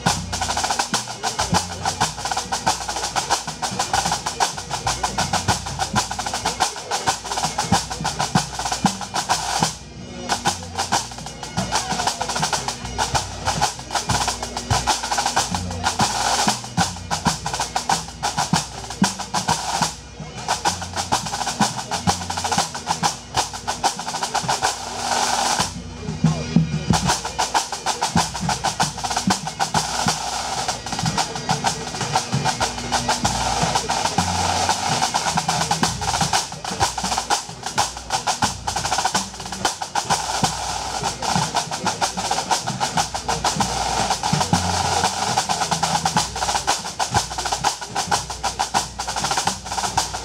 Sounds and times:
Drum: 0.0s - 50.2s.

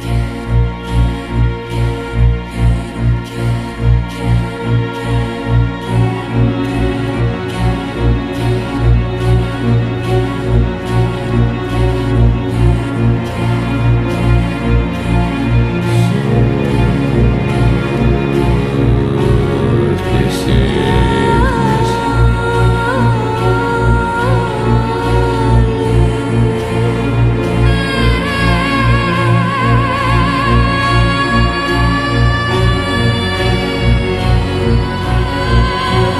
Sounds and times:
Music: 0.0s - 36.1s.

